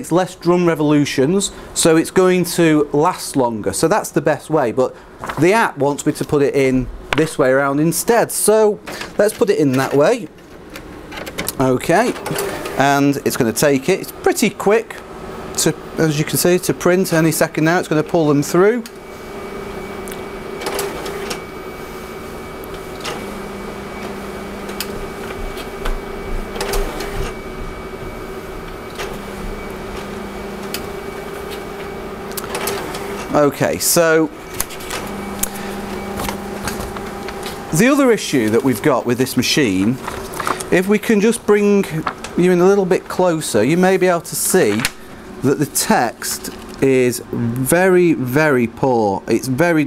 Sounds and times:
Speech: 0.0 - 10.3, 11.5 - 12.2, 12.8 - 15.0, 15.6 - 18.9, 33.3 - 34.4, 37.7 - 40.0, 40.7 - 49.8
Printer: 7.1 - 48.1.

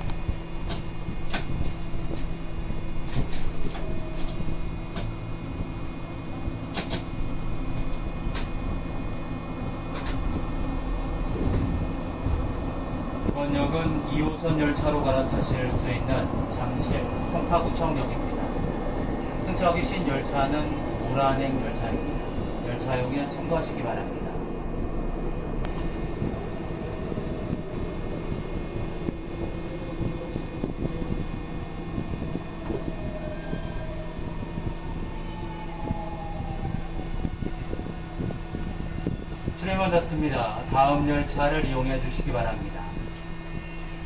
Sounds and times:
Rail transport: 0.0 - 44.0
Speech: 13.3 - 18.3, 19.5 - 22.0, 22.7 - 24.2, 39.6 - 43.0.

